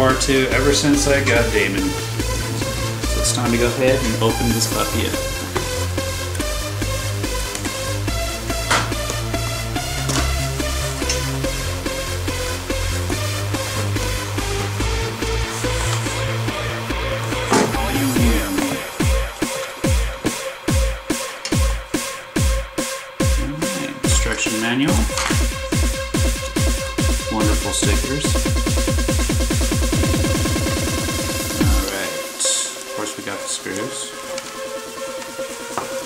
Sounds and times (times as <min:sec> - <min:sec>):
Electronic dance music: 0:00.0 - 0:36.0.